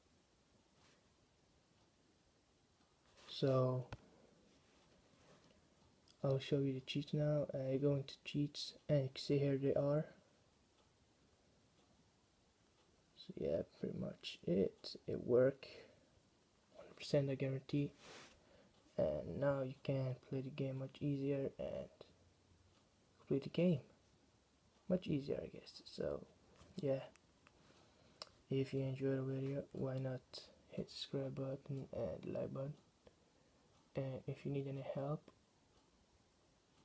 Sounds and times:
Speech: 3.3 - 4.0, 6.2 - 10.2, 13.2 - 16.0, 16.8 - 18.0, 18.9 - 22.1, 23.2 - 24.0, 24.9 - 27.2, 28.5 - 32.8, 33.9 - 35.4.

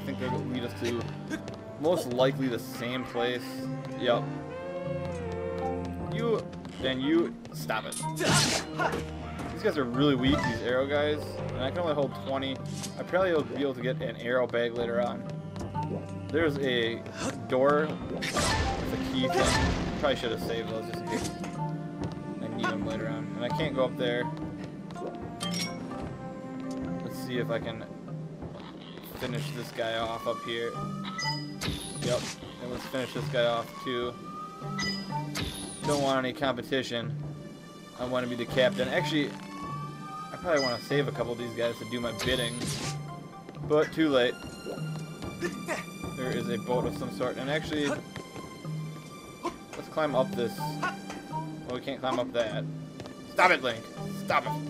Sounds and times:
Speech: 0.0 - 1.1, 1.8 - 4.2, 9.6 - 15.2, 16.4 - 17.9, 18.9 - 21.2, 22.4 - 24.3, 27.0 - 27.9, 29.0 - 30.8, 32.0 - 34.2, 35.8 - 37.1, 38.0 - 39.3, 40.4 - 42.6, 43.7 - 44.4, 45.7 - 48.0, 49.8 - 50.9, 51.7 - 52.6, 53.4 - 54.6
Music: 0.0 - 54.6.

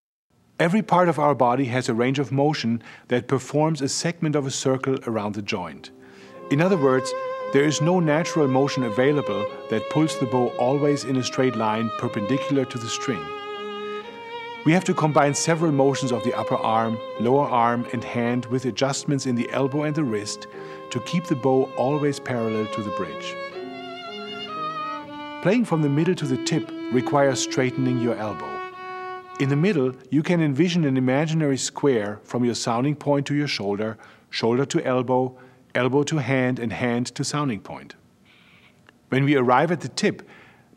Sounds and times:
Speech: 0.6 - 5.9, 6.5 - 13.3, 14.7 - 23.4, 25.4 - 28.6, 29.4 - 38.0, 39.1 - 40.3.

